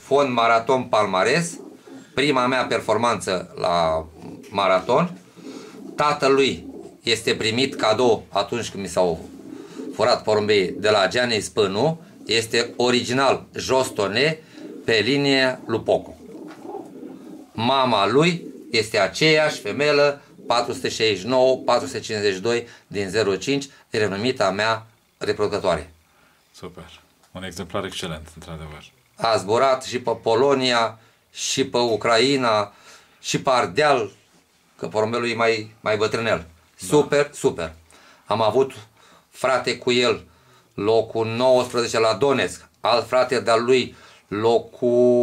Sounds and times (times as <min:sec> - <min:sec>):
Speech: 0:00.0 - 0:01.6, 0:02.2 - 0:05.2, 0:06.0 - 0:09.3, 0:10.0 - 0:16.2, 0:17.6 - 0:26.0, 0:26.6 - 0:34.2, 0:34.8 - 0:45.2.